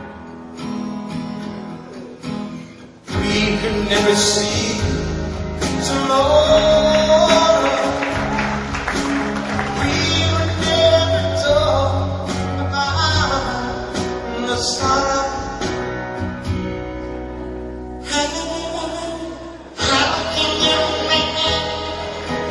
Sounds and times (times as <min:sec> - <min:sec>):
Jazz: 0:03.1 - 0:22.5.